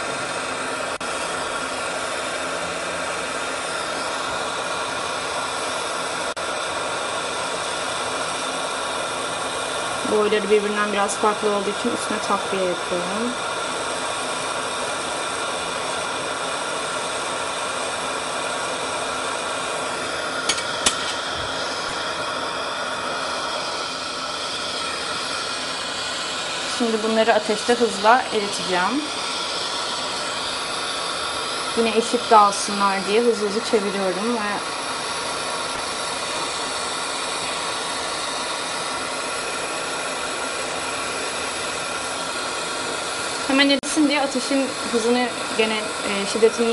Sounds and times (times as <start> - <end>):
Speech: 10.0 - 13.4, 26.7 - 29.1, 31.8 - 34.6, 43.5 - 46.7.